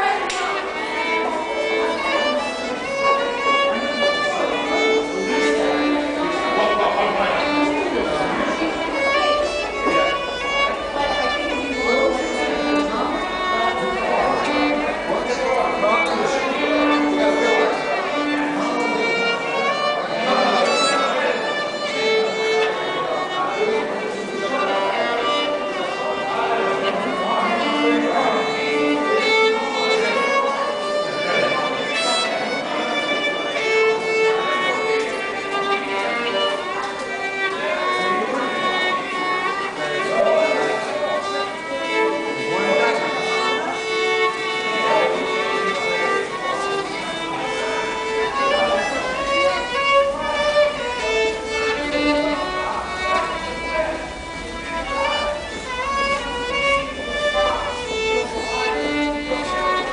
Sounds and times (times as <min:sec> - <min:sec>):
Speech: 0:00.0 - 0:59.9
Violin, fiddle: 0:00.0 - 0:59.9.